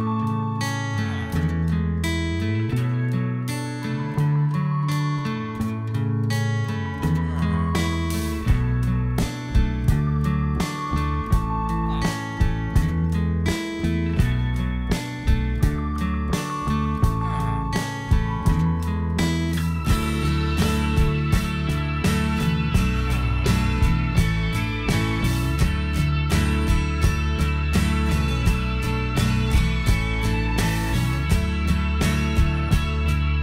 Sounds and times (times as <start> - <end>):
Music: 0.0 - 33.4.